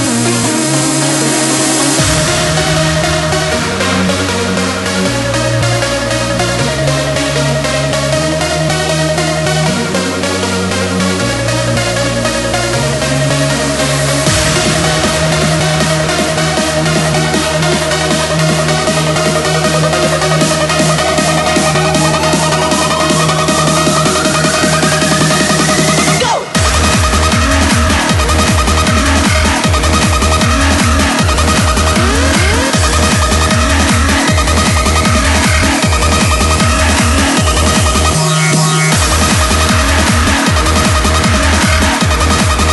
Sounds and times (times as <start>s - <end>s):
Techno: 0.0s - 42.7s.